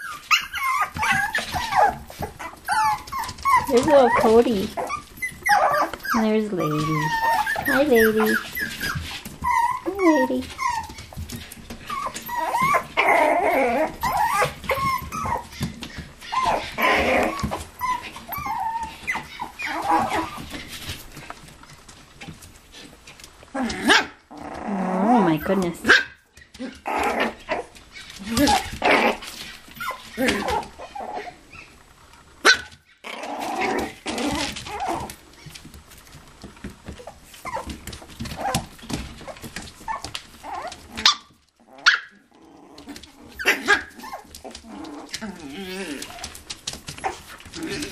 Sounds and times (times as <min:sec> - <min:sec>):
Dog: 0:00.0 - 0:21.3, 0:32.4 - 0:35.6, 0:36.9 - 0:47.9.